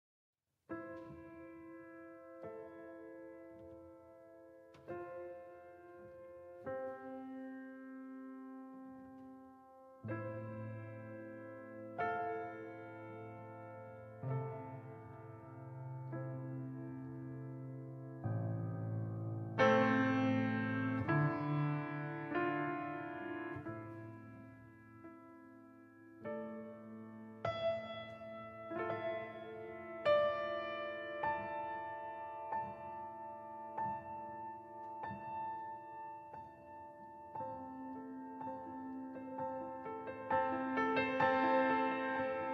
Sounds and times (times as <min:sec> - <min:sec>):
Piano: 0:00.6 - 0:42.5.